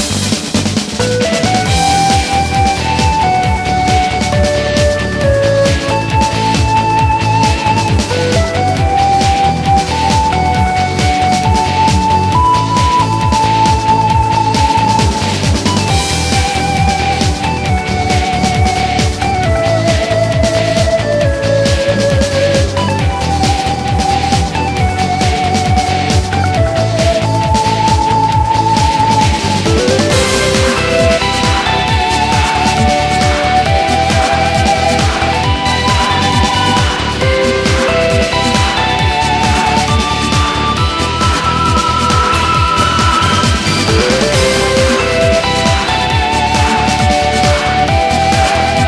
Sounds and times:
Music: 0:00.0 - 0:48.8.

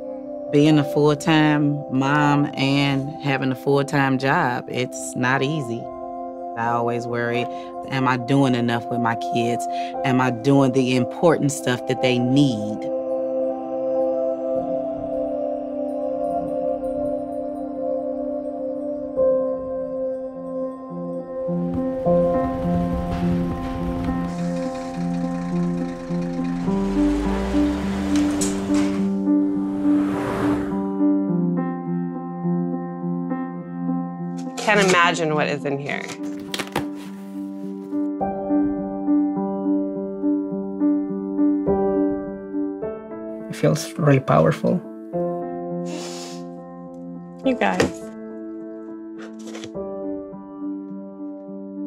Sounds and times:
Music: 0:00.0 - 0:51.8
Vehicle: 0:22.4 - 0:30.8.

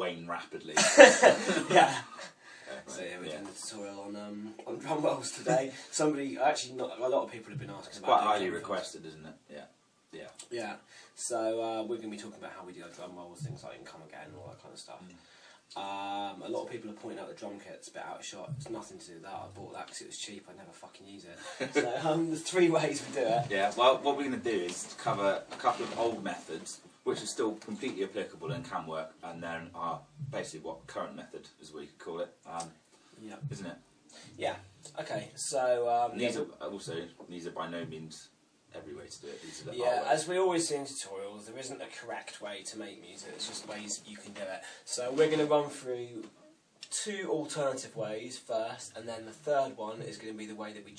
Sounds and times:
Speech: 0:00.0 - 0:02.1, 0:02.7 - 0:50.9.

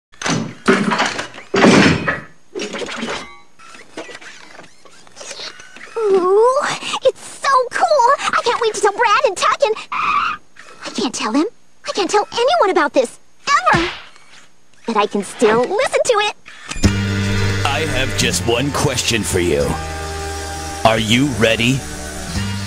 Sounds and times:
Speech: 0:06.0 - 0:09.8, 0:10.9 - 0:13.9, 0:14.9 - 0:16.4, 0:17.7 - 0:19.8, 0:20.8 - 0:21.8.

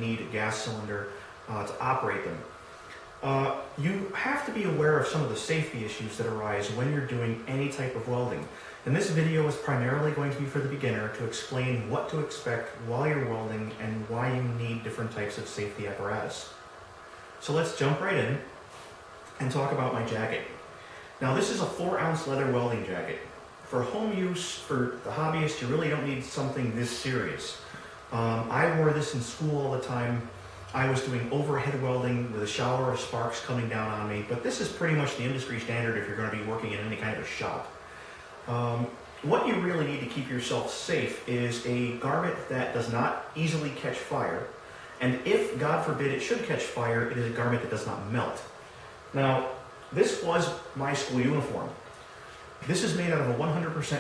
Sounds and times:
Speech: 0:00.0 - 0:02.6, 0:03.2 - 0:16.6, 0:17.4 - 0:18.6, 0:19.3 - 0:20.6, 0:21.2 - 0:37.8, 0:38.4 - 0:51.9, 0:52.6 - 0:54.0.

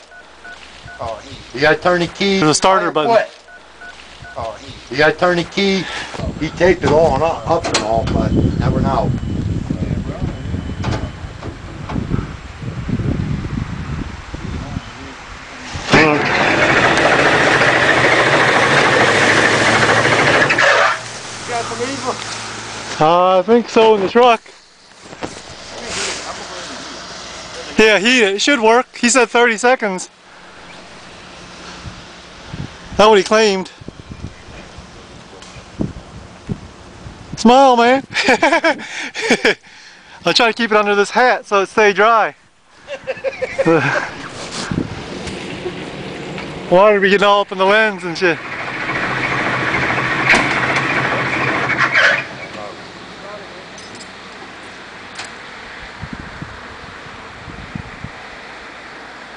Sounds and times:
Speech: 0:04.4 - 0:09.1, 0:27.5 - 0:30.1, 0:33.0 - 0:33.8, 0:37.4 - 0:38.1, 0:40.2 - 0:42.4, 0:46.7 - 0:48.4.

